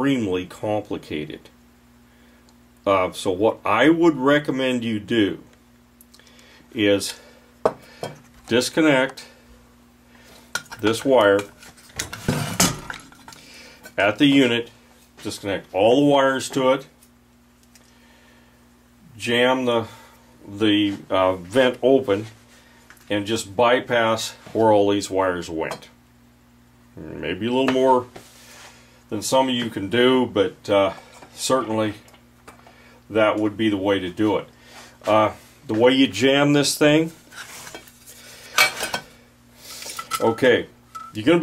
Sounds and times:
Speech: 0:00.0 - 0:01.6, 0:02.8 - 0:05.5, 0:06.7 - 0:07.2, 0:08.5 - 0:09.3, 0:10.8 - 0:11.5, 0:14.0 - 0:16.9, 0:19.1 - 0:22.4, 0:23.1 - 0:26.0, 0:27.0 - 0:28.2, 0:29.1 - 0:32.1, 0:33.1 - 0:37.2, 0:40.2 - 0:41.4
Inside, small room: 0:00.0 - 0:41.4.

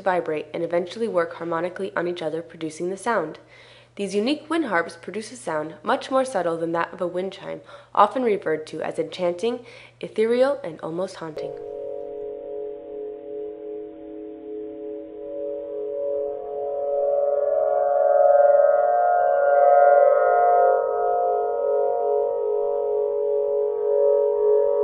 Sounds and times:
Speech: 0:00.0 - 0:03.4, 0:04.0 - 0:11.6
Music: 0:11.6 - 0:24.8.

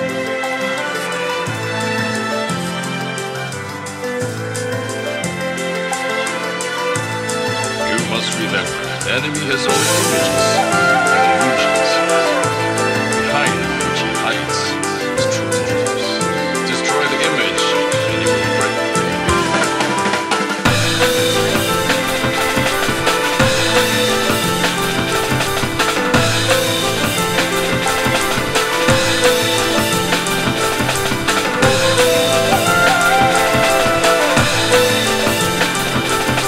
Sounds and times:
Music: 0:00.0 - 0:36.4
Speech: 0:07.8 - 0:12.6, 0:13.2 - 0:18.5.

